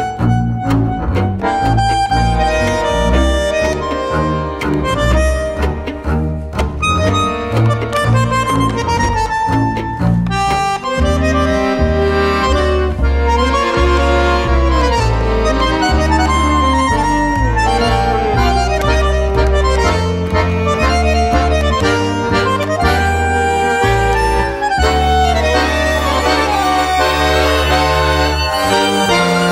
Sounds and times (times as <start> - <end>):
Accordion: 0.0 - 29.5
Cello: 0.0 - 29.5
Double bass: 0.0 - 29.5
Violin, fiddle: 0.0 - 29.5.